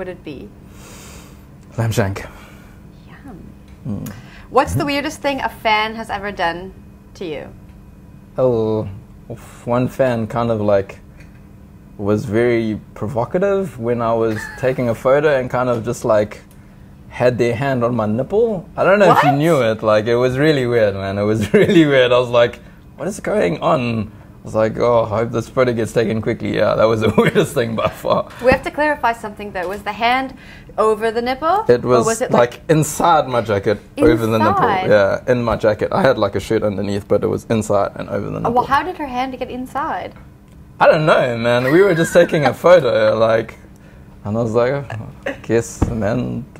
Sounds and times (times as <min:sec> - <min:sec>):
Inside, small room: 0:00.0 - 0:46.5.